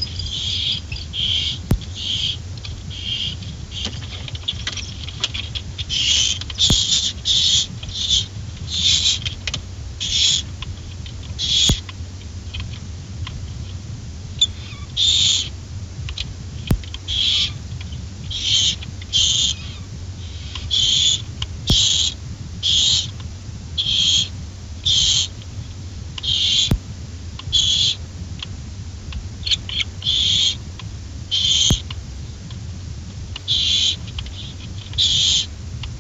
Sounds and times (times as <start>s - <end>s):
Owl: 0.0s - 11.9s, 14.4s - 23.2s, 23.8s - 25.3s, 26.2s - 26.8s, 27.5s - 28.0s, 29.4s - 30.6s, 31.3s - 32.0s, 33.4s - 35.5s.